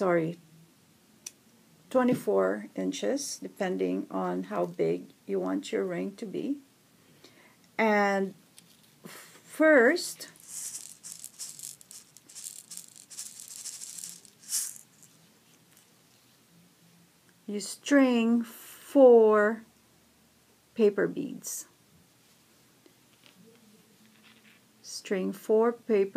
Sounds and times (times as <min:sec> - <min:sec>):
Speech: 0:00.0 - 0:00.4, 0:01.9 - 0:06.6, 0:07.8 - 0:08.4, 0:09.5 - 0:10.3, 0:17.5 - 0:19.7, 0:20.8 - 0:21.7, 0:24.8 - 0:26.1
Inside, small room: 0:00.0 - 0:26.1.